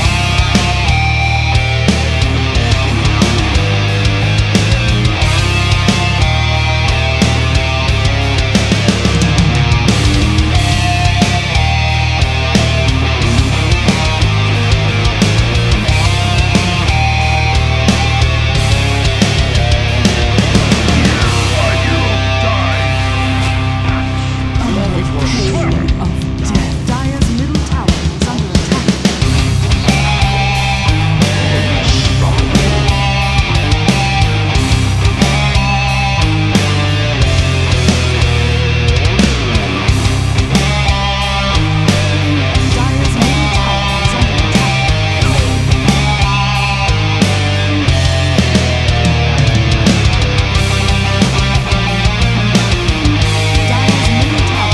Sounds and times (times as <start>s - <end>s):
Heavy metal: 0.0s - 54.7s.